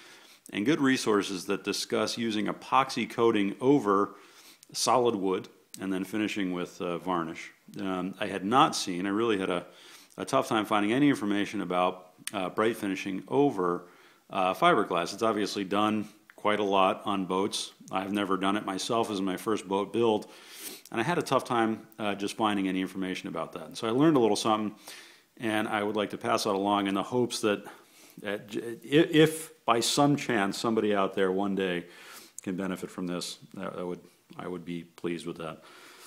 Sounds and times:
Speech: 0.5 - 20.3, 20.9 - 24.8, 25.4 - 35.6.

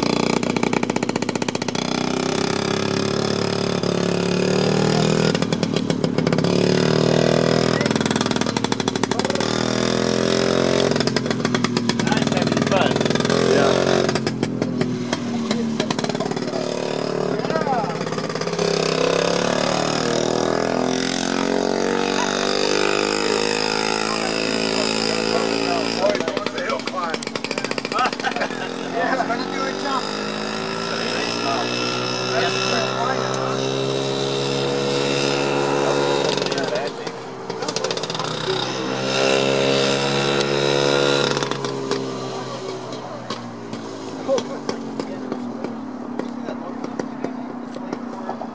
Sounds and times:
Car: 0.0 - 48.5.

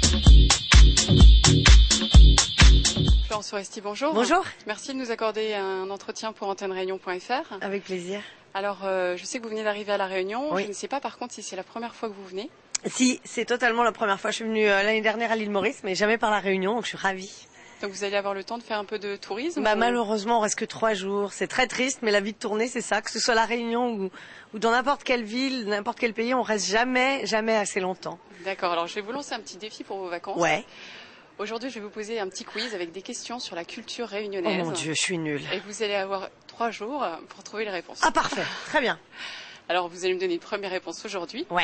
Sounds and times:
Speech: 3.3 - 30.6, 31.4 - 39.0.

